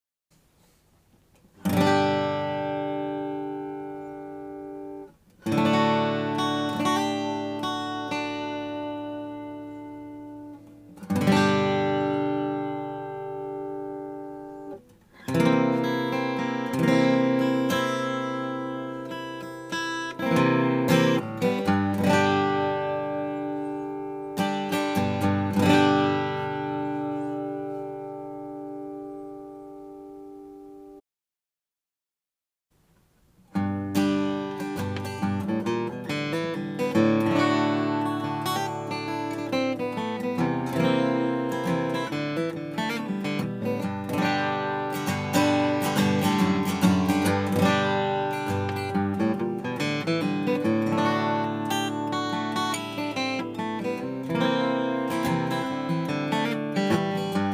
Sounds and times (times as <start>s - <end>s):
Acoustic guitar: 0.4s - 31.0s, 32.8s - 57.5s.